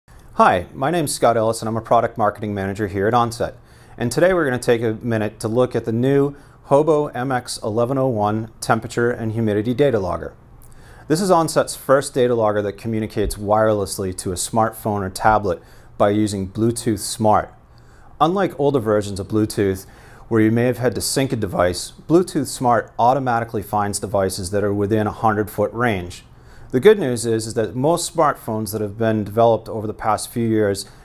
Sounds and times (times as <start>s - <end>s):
Speech: 0.4s - 10.4s, 11.1s - 17.6s, 18.2s - 31.0s.